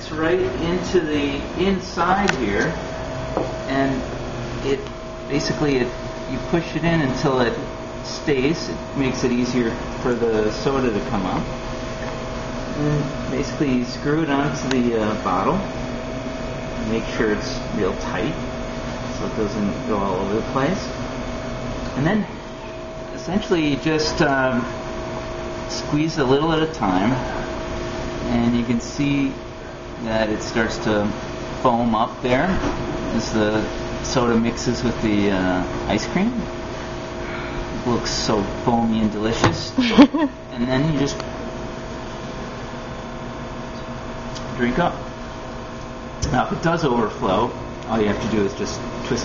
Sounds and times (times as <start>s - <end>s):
Speech: 0.0s - 2.8s, 3.7s - 11.5s, 12.8s - 15.7s, 16.8s - 18.4s, 19.2s - 21.0s, 22.0s - 22.4s, 23.2s - 24.8s, 25.7s - 27.3s, 28.3s - 29.4s, 30.0s - 36.5s, 37.8s - 41.2s, 44.4s - 45.0s, 46.2s - 49.2s.